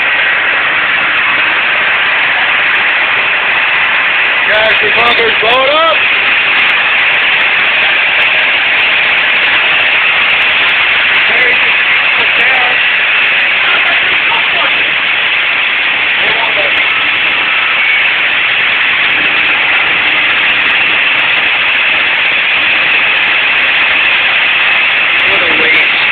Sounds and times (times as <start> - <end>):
Speech: 4.5 - 6.0, 11.2 - 12.8, 13.6 - 15.0, 16.2 - 16.8, 25.2 - 26.1.